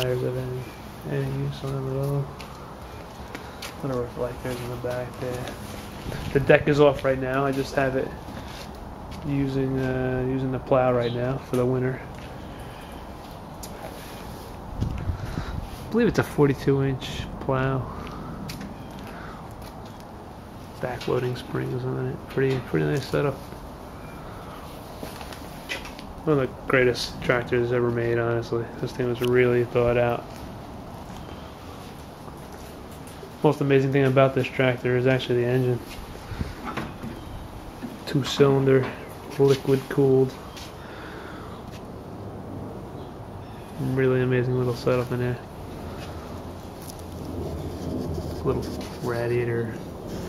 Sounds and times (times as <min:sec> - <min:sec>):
Speech: 0:00.0 - 0:02.4, 0:03.8 - 0:05.6, 0:06.3 - 0:08.2, 0:09.2 - 0:12.1, 0:15.9 - 0:17.9, 0:20.8 - 0:23.4, 0:26.2 - 0:30.3, 0:33.4 - 0:35.9, 0:38.0 - 0:40.4, 0:43.8 - 0:45.5, 0:48.4 - 0:49.9.